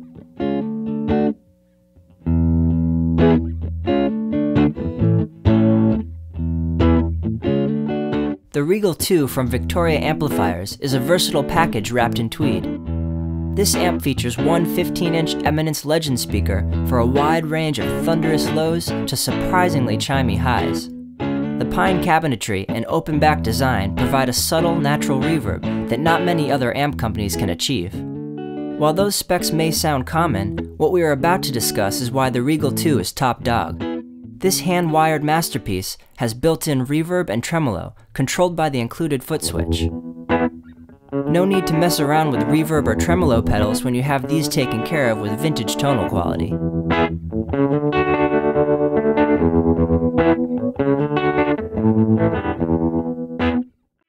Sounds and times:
Electric guitar: 0.0s - 1.4s, 2.0s - 8.5s, 9.3s - 22.1s, 22.7s - 34.6s, 39.4s - 53.8s
Speech: 8.5s - 12.8s, 13.6s - 20.9s, 21.6s - 28.0s, 28.8s - 33.8s, 34.4s - 39.9s, 41.3s - 46.6s.

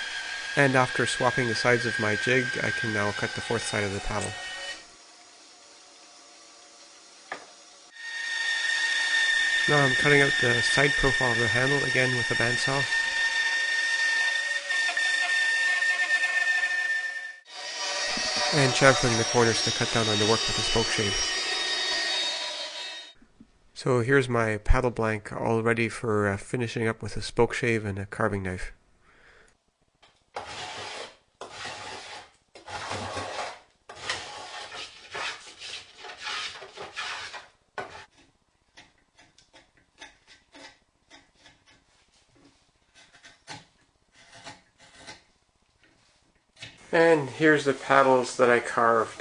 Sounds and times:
Wood: 0.0s - 4.5s, 7.3s - 7.6s, 17.8s - 23.0s, 30.0s - 46.0s.

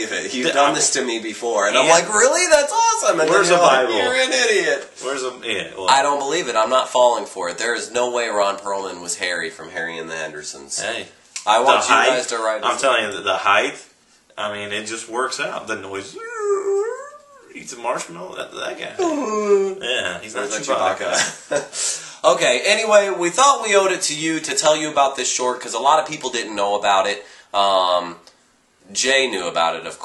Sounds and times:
Speech: 0.0s - 21.3s, 22.2s - 28.3s, 28.9s - 30.0s
Inside, small room: 0.0s - 30.0s.

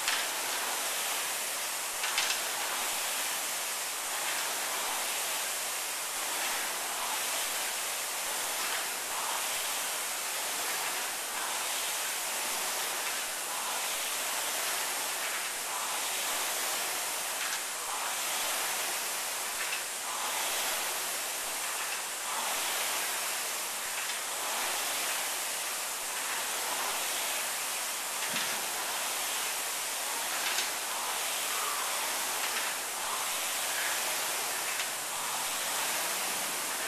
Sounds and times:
Pink noise: 0.0s - 36.8s.

